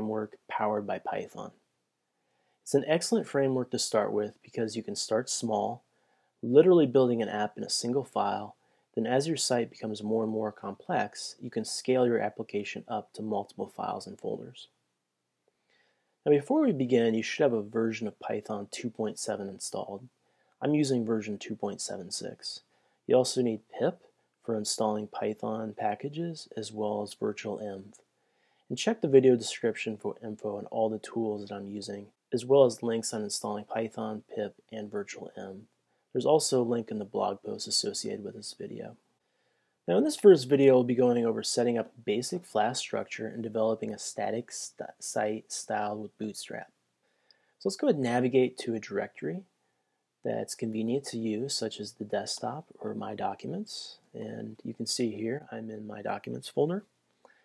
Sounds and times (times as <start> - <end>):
Speech: 0.0 - 1.6, 2.6 - 14.8, 16.2 - 28.1, 28.7 - 39.1, 39.8 - 46.8, 47.6 - 49.6, 50.2 - 56.9.